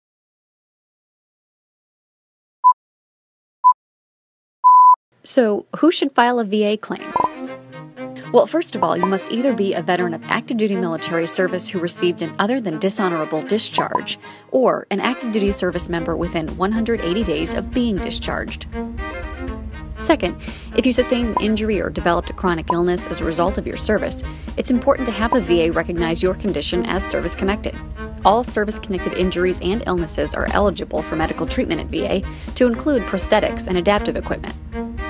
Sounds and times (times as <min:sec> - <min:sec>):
Speech: 0:05.2 - 0:07.2, 0:08.2 - 0:18.6, 0:20.0 - 0:34.6
Music: 0:06.6 - 0:35.0.